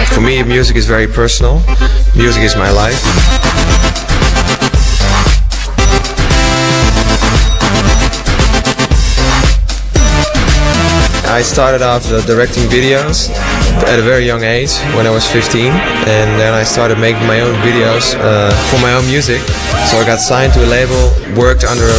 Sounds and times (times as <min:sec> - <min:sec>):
Speech: 0:00.0 - 0:03.0, 0:11.2 - 0:21.9
Music: 0:00.0 - 0:21.9.